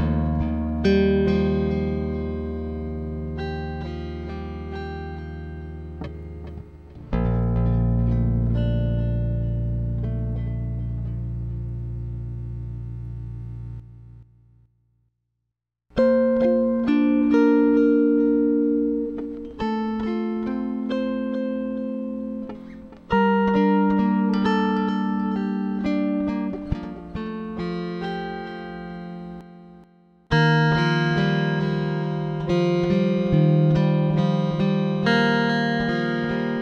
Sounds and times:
Music: 0:00.0 - 0:14.7, 0:15.9 - 0:36.6
Electronic tuner: 0:00.0 - 0:15.0, 0:15.9 - 0:36.6.

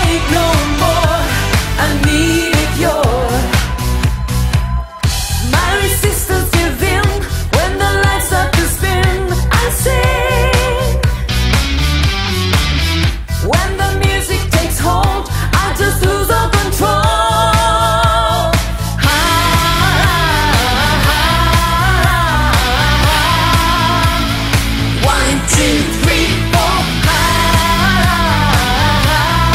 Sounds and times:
Singing: 0:00.0 - 0:11.1, 0:13.5 - 0:24.4, 0:25.0 - 0:29.5
Inside, public space: 0:00.0 - 0:11.5
Pop music: 0:00.0 - 0:29.5.

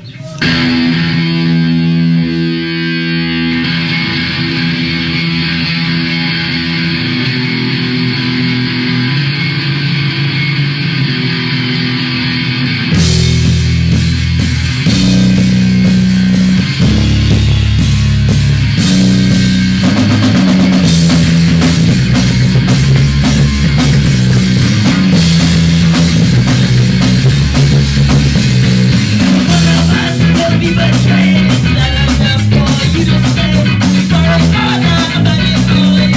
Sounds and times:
Guitar: 0:00.0 - 0:36.1
Drum kit: 0:00.3 - 0:36.1
Rock music: 0:00.4 - 0:36.1.

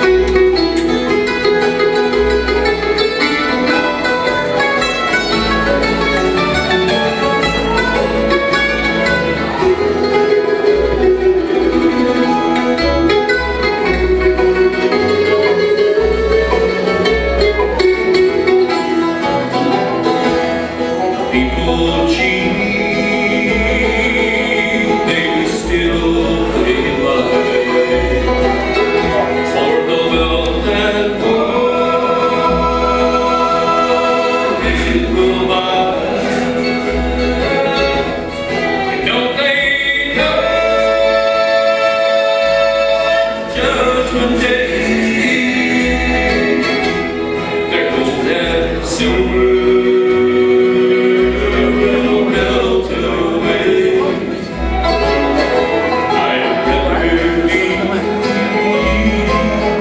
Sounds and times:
Bluegrass: 0:00.0 - 0:59.8.

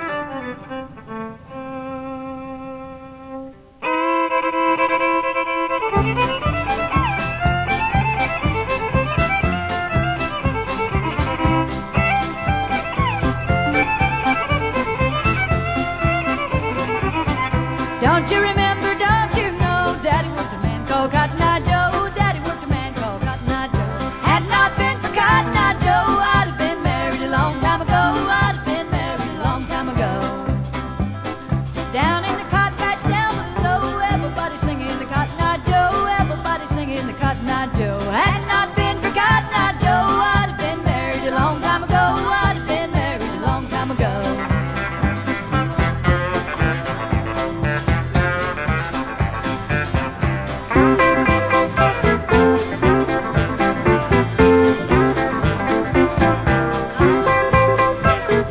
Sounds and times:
Music: 0:00.0 - 0:58.5.

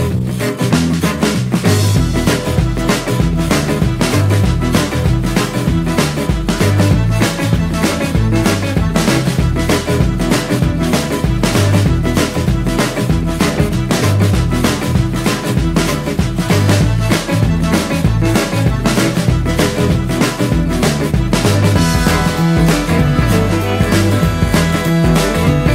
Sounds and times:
Jingle (music): 0:00.0 - 0:25.7.

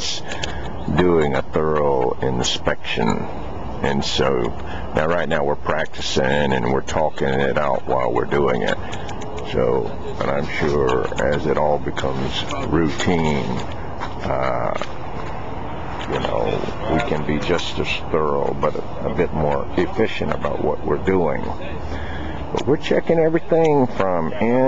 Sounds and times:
Speech: 0:00.0 - 0:00.3, 0:00.9 - 0:08.8, 0:09.4 - 0:14.9, 0:16.0 - 0:21.9, 0:22.5 - 0:24.6
Outside, urban or manmade: 0:00.0 - 0:24.6.

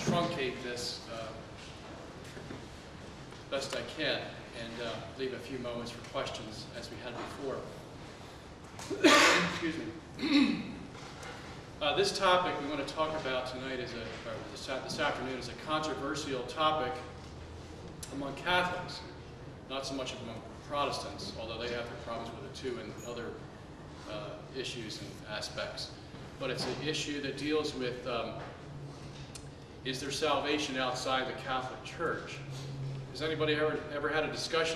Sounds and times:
Speech: 0:00.0 - 0:01.5, 0:03.5 - 0:07.8, 0:09.0 - 0:10.0, 0:11.8 - 0:17.2, 0:18.0 - 0:23.4, 0:24.0 - 0:28.5, 0:29.8 - 0:32.5, 0:33.1 - 0:34.7.

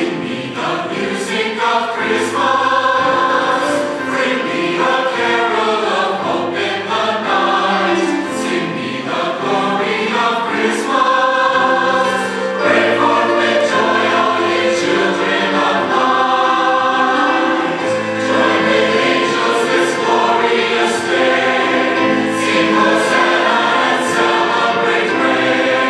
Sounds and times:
Christmas music: 0:00.0 - 0:25.8.

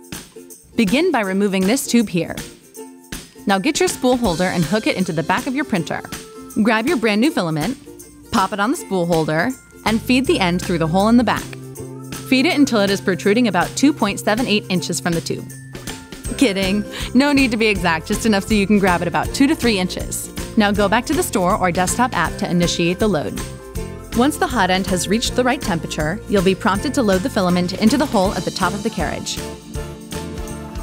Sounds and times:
Music: 0:00.0 - 0:30.8
Speech: 0:00.8 - 0:02.4, 0:03.5 - 0:07.8, 0:08.4 - 0:11.6, 0:12.3 - 0:15.5, 0:16.4 - 0:23.4, 0:24.2 - 0:29.4.

